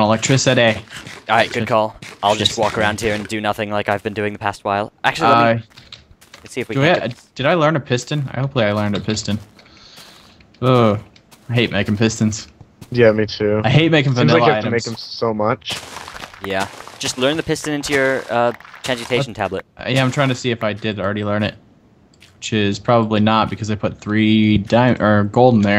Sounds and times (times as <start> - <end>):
Speech: 0.0 - 5.6, 6.5 - 9.4, 10.6 - 15.8, 16.5 - 21.6, 22.4 - 25.7.